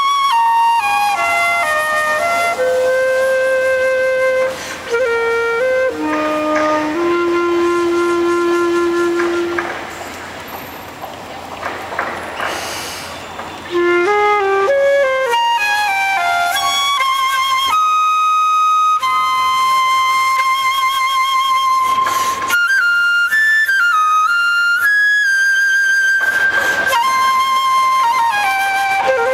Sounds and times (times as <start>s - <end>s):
Flute: 0.0s - 11.5s, 12.7s - 29.3s.